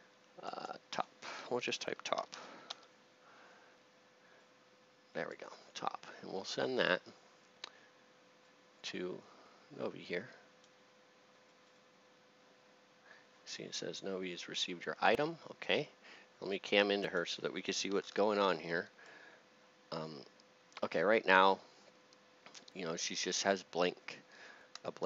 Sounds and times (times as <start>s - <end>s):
Speech: 0.4s - 2.4s, 5.1s - 7.2s, 8.8s - 10.4s, 13.5s - 18.9s, 20.0s - 21.7s, 22.7s - 24.2s, 24.8s - 25.0s.